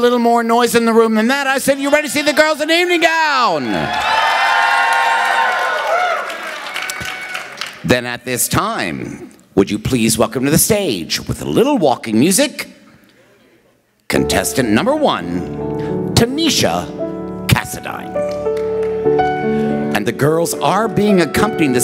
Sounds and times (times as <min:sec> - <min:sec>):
Speech: 0:00.0 - 0:03.9, 0:07.9 - 0:12.7, 0:14.1 - 0:15.5, 0:16.2 - 0:16.9, 0:17.5 - 0:18.2, 0:20.0 - 0:21.8.